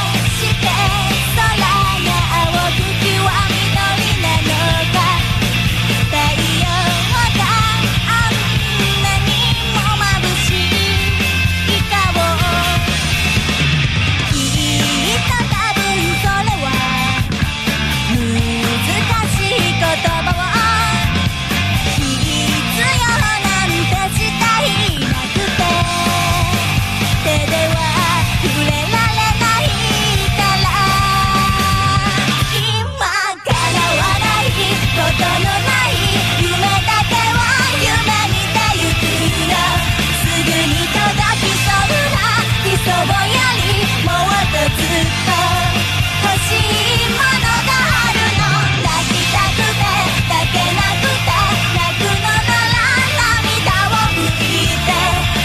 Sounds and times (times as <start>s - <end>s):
Music: 0.0s - 55.4s.